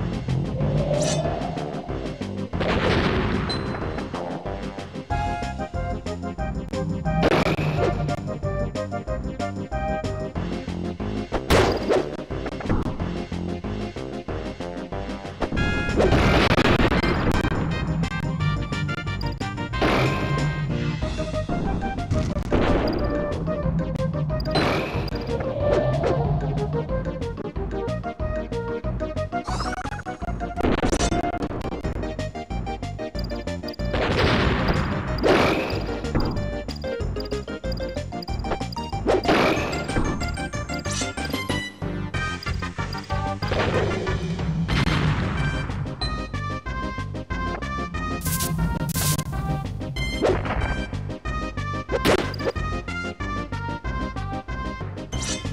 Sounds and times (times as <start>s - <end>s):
Music: 0.0s - 55.5s
Smash, crash: 2.4s - 4.2s, 7.2s - 8.0s, 15.4s - 17.6s, 19.8s - 20.4s, 24.5s - 25.2s, 33.9s - 36.2s, 39.1s - 41.2s, 43.4s - 45.8s, 48.2s - 49.5s.